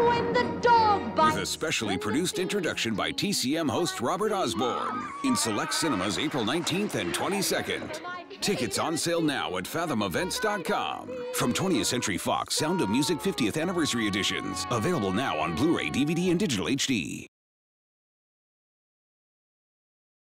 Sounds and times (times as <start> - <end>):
Music: 0.0 - 17.0
Speech: 1.2 - 17.3.